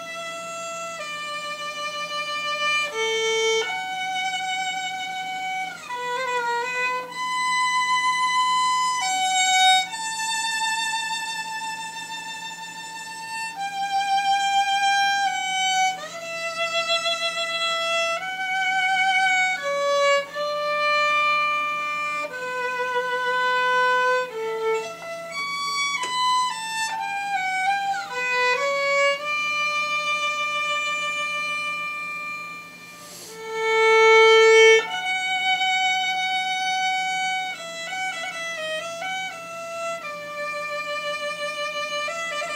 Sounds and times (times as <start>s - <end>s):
Violin, fiddle: 0.0s - 42.5s.